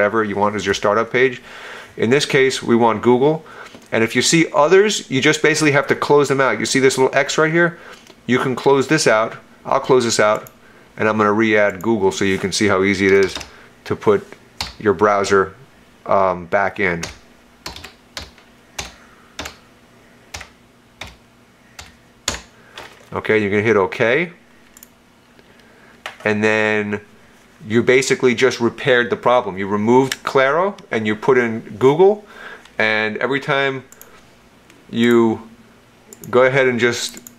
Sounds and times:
Computer keyboard: 13.1s - 13.5s, 17.0s - 19.6s, 20.3s - 21.2s, 21.8s - 22.5s.

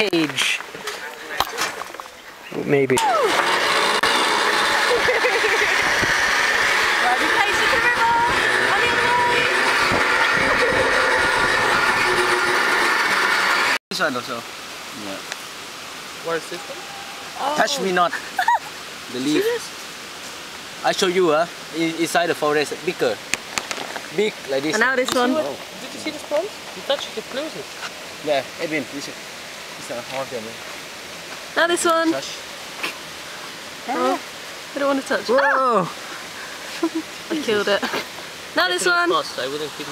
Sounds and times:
Pink noise: 13.9s - 39.9s.

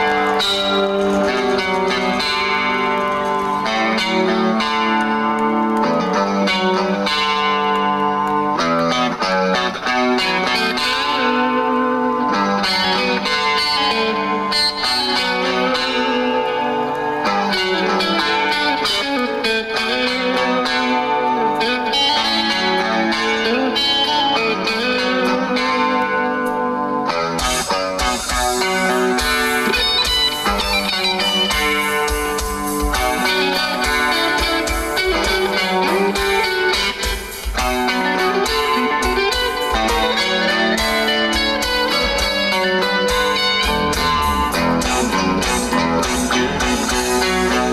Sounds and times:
Electric guitar: 0.0s - 47.7s.

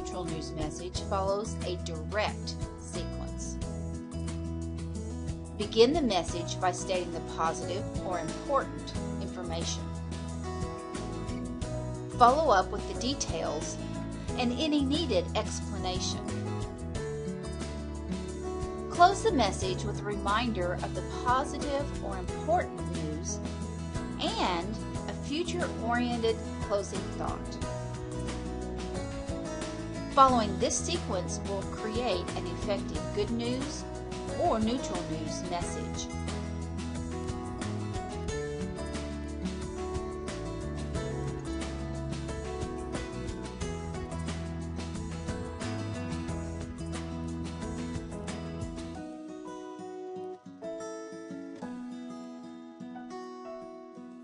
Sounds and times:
Speech: 0.0s - 3.6s, 5.6s - 9.8s, 12.2s - 13.8s, 14.4s - 16.2s, 19.0s - 23.4s, 24.2s - 27.6s, 30.2s - 36.1s
Music: 0.0s - 54.2s.

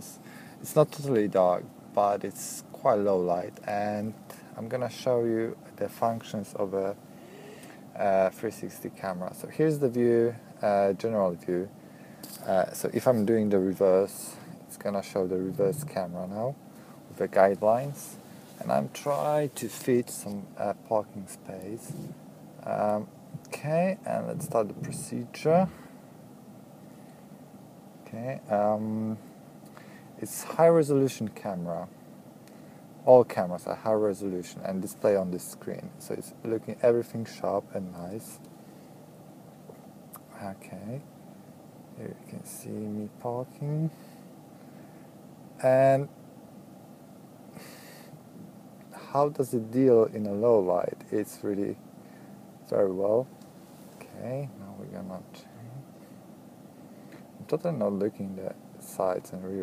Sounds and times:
Speech: 0.0s - 7.0s, 8.0s - 11.7s, 12.4s - 25.8s, 28.0s - 29.3s, 30.2s - 31.9s, 33.0s - 38.5s, 40.2s - 41.1s, 42.0s - 44.0s, 45.6s - 46.2s, 48.9s - 51.8s, 52.6s - 53.3s, 54.0s - 55.9s, 57.4s - 59.6s.

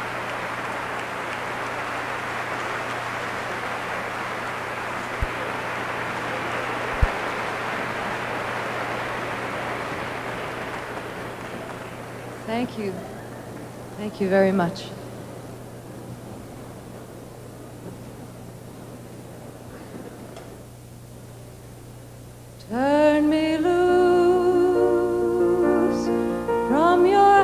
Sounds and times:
Speech: 12.5s - 13.4s, 14.0s - 15.1s.

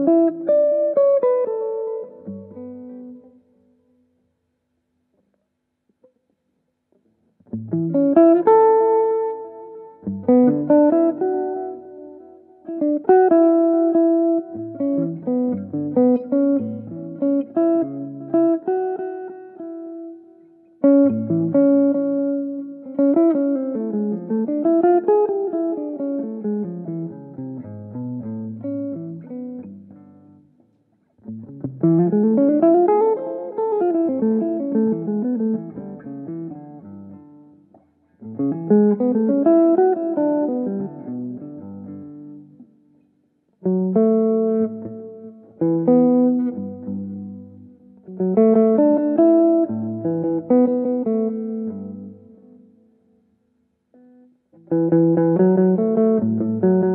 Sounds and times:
Guitar: 0.0s - 56.9s.

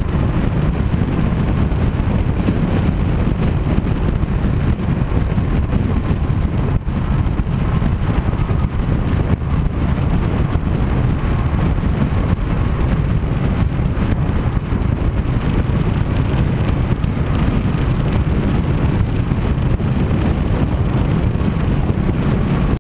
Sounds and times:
Car: 0.0s - 22.8s.

